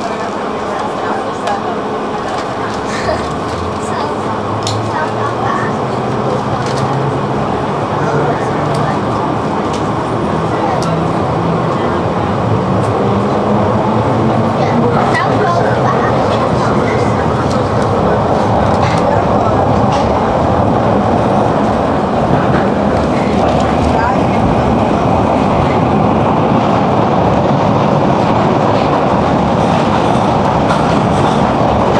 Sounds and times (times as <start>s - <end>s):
Speech: 0.0s - 12.4s, 14.2s - 20.3s, 23.1s - 26.0s.